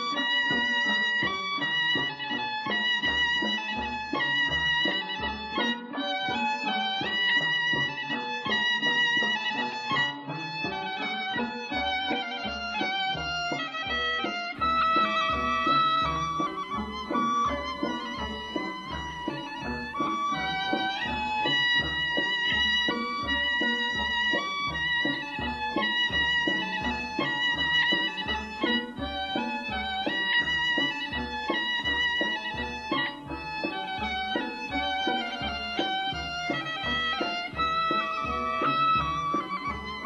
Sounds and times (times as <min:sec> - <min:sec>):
Music: 0:00.0 - 0:40.0.